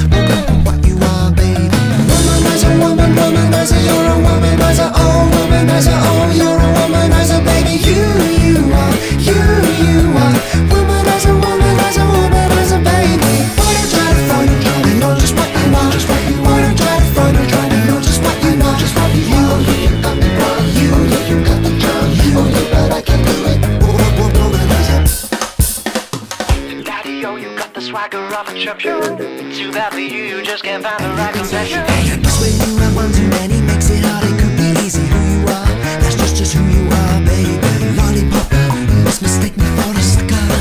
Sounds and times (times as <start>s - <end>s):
Music: 0.0s - 40.6s
Singing: 0.3s - 25.2s, 26.8s - 40.6s.